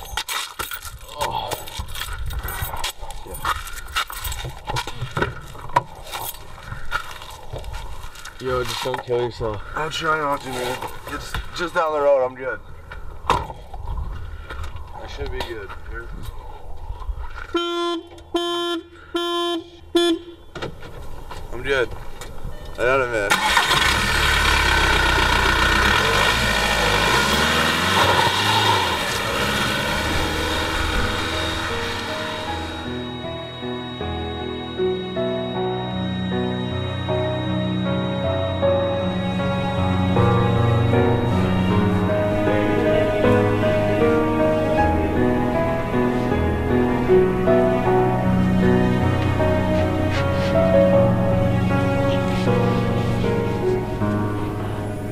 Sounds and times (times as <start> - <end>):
Speech: 15.0 - 16.2.